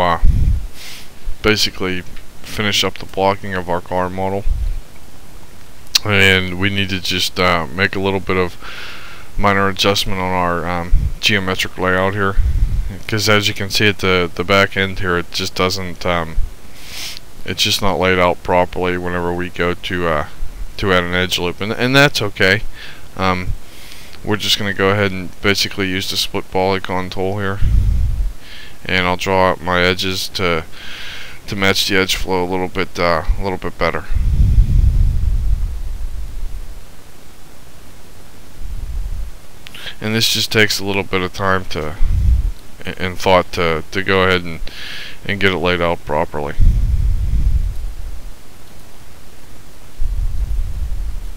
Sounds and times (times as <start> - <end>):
Speech: 0.0 - 0.3, 1.4 - 4.5, 6.0 - 8.6, 9.4 - 16.4, 17.4 - 23.6, 24.2 - 27.6, 28.8 - 30.7, 31.5 - 34.2, 39.8 - 42.0, 42.8 - 46.6.